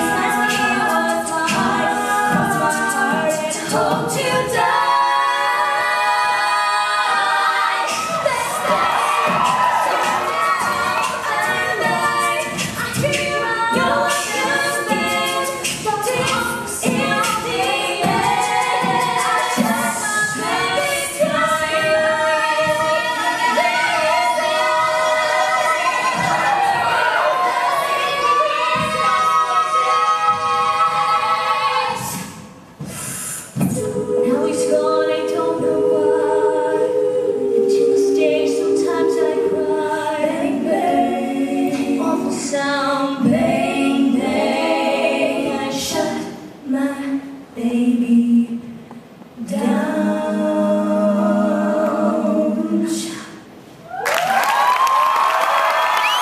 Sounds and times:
A capella: 0.0 - 56.2.

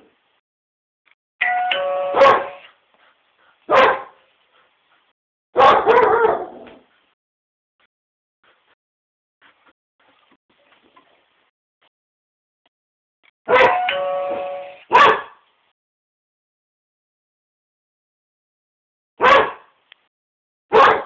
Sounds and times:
Ding-dong: 1.4 - 2.2, 13.6 - 14.8
Bark: 2.1 - 2.7, 3.7 - 4.2, 5.6 - 6.8, 13.5 - 13.8, 14.9 - 15.4, 19.2 - 19.7, 20.7 - 21.0.

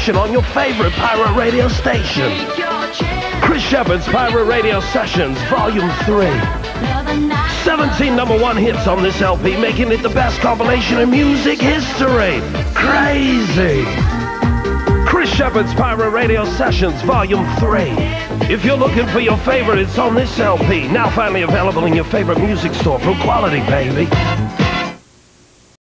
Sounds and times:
Speech: 0.0 - 2.4, 3.4 - 6.6, 7.5 - 14.0, 15.1 - 24.2
Radio: 0.0 - 14.2, 15.0 - 24.3
Music: 0.0 - 25.1.

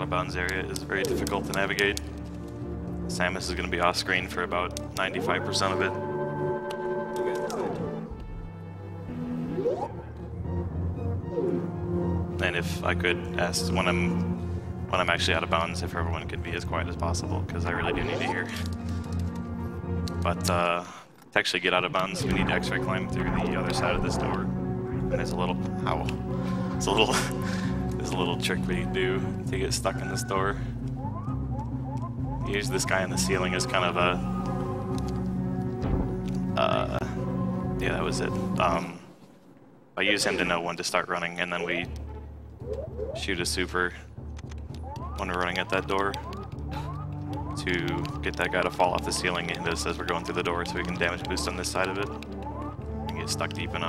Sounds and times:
Speech: 0.0 - 2.0, 3.1 - 6.0, 12.4 - 14.2, 14.9 - 18.7, 20.2 - 24.5, 25.1 - 26.2, 26.8 - 27.4, 28.0 - 30.6, 32.4 - 34.2, 36.6 - 37.2, 37.8 - 39.0, 40.0 - 41.9, 43.2 - 44.0, 45.2 - 46.3, 47.6 - 52.2, 53.1 - 53.8
Music: 0.0 - 53.8.

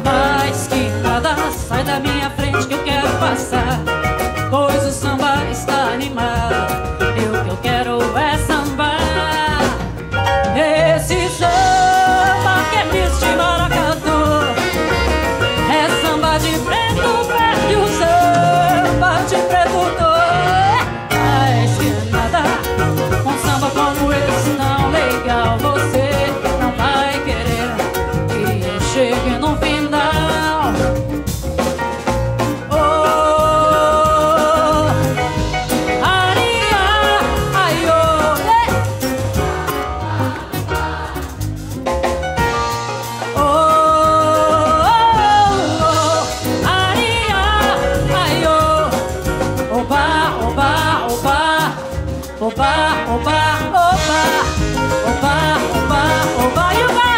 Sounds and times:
Jazz: 0.0 - 57.1
Swing music: 0.0 - 57.1.

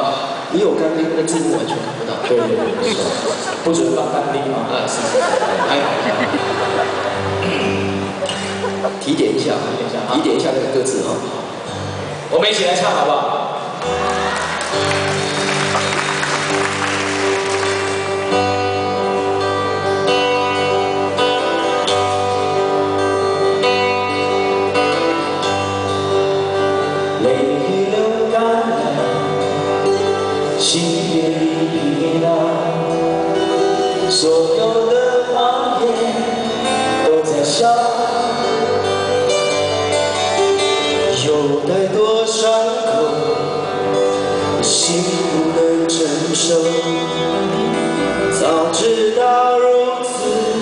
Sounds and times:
Speech: 0.0 - 6.1, 9.0 - 11.3, 12.3 - 13.5
Music: 0.0 - 50.6.

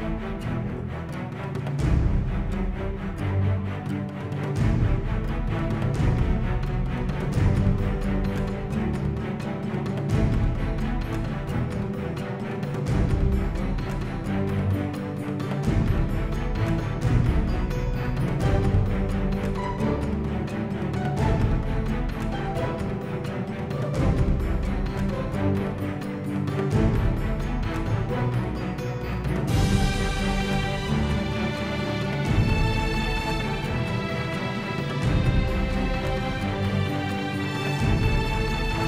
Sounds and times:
Music: 0.0 - 38.8.

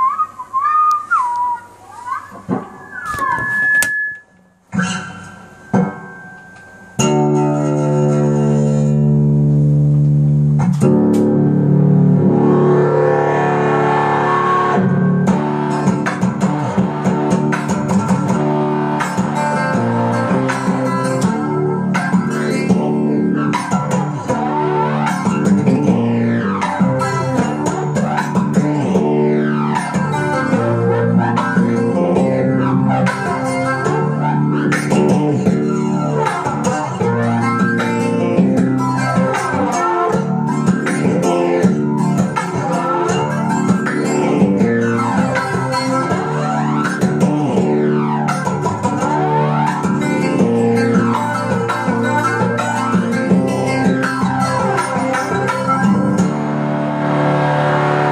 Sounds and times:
Acoustic guitar: 0.0 - 58.1
Dubstep: 1.7 - 4.2, 10.6 - 58.1.

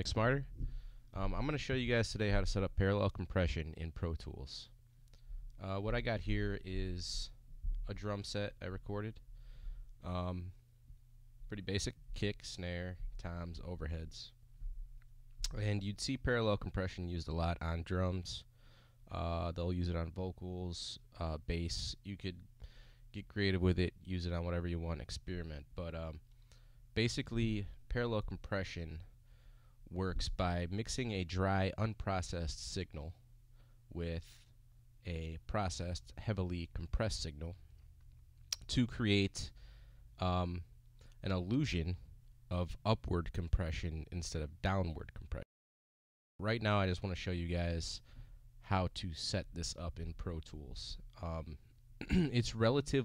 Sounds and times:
Speech: 0.0 - 0.6, 1.2 - 4.8, 5.6 - 9.2, 10.0 - 10.6, 11.5 - 14.4, 15.5 - 18.5, 19.1 - 22.5, 23.1 - 26.2, 27.0 - 29.1, 29.9 - 33.2, 33.9 - 37.6, 38.6 - 39.6, 40.2 - 45.5, 46.4 - 53.0.

